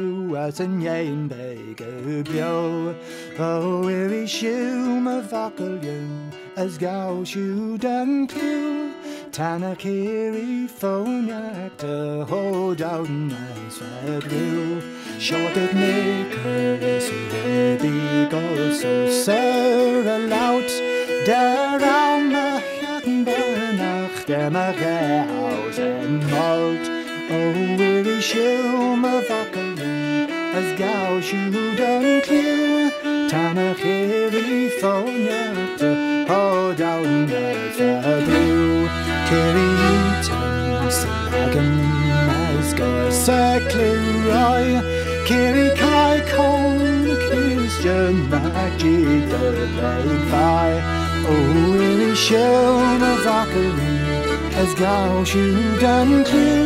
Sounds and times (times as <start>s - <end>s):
Music: 0.0s - 56.6s.